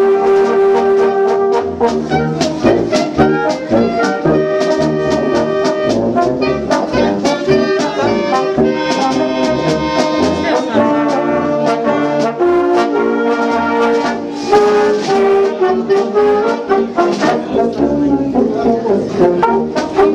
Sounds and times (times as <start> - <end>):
Trombone: 0.0 - 20.1
Speech: 2.1 - 3.1, 6.7 - 12.2, 16.8 - 20.1.